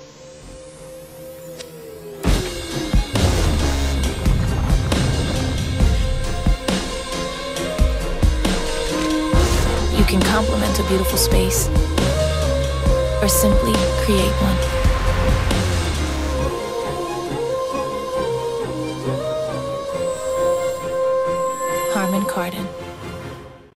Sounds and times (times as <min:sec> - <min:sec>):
Music: 0:00.0 - 0:23.7
Speech: 0:09.9 - 0:11.7, 0:13.2 - 0:14.8, 0:21.8 - 0:22.7.